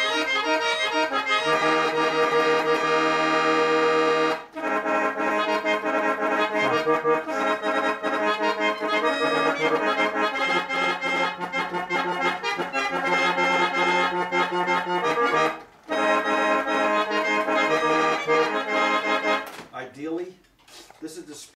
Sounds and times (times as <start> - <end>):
Music: 0.0 - 19.6
Speech: 19.7 - 20.4, 21.0 - 21.5.